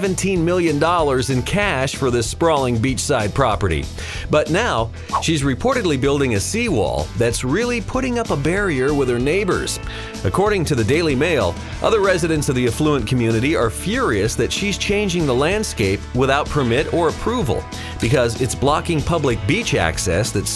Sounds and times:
Music: 0.0 - 20.5
Speech: 0.0 - 20.5.

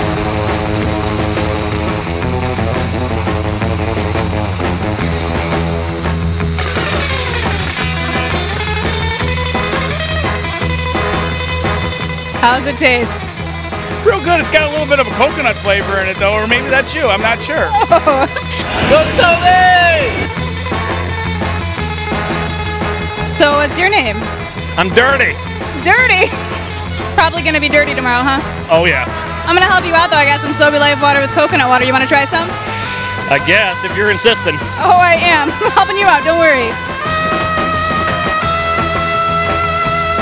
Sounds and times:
Music: 0.0 - 40.2
Speech: 18.6 - 20.3, 28.7 - 32.4, 33.3 - 36.7.

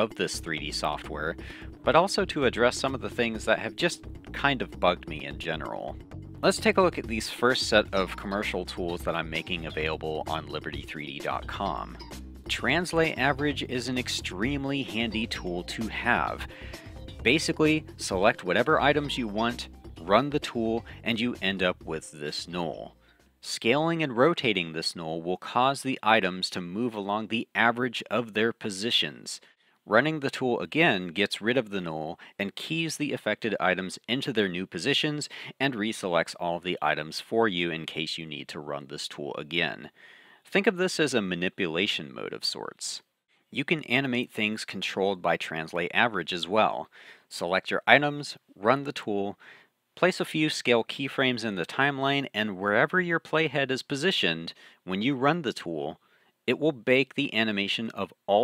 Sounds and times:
Speech: 0.0 - 16.6, 17.2 - 43.0, 43.6 - 49.4, 50.0 - 58.4
Music: 0.0 - 23.8.

